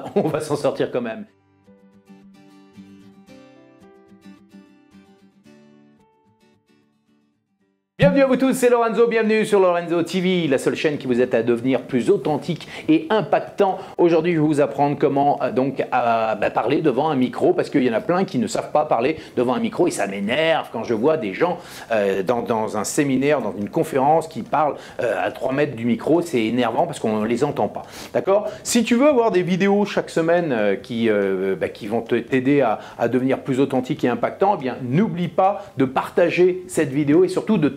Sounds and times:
Speech: 0.0s - 1.3s, 8.0s - 37.7s.

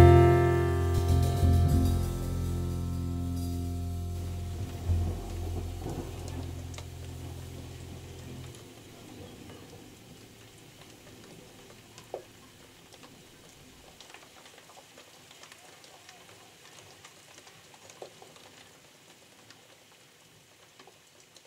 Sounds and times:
Rain: 0.0s - 21.4s
Outside, rural or natural: 2.4s - 19.3s.

